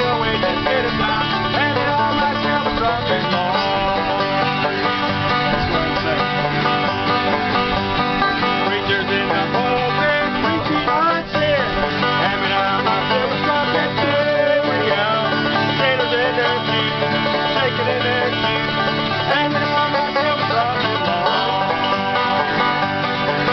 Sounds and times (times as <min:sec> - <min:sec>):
Musical instrument: 0:00.0 - 0:23.5.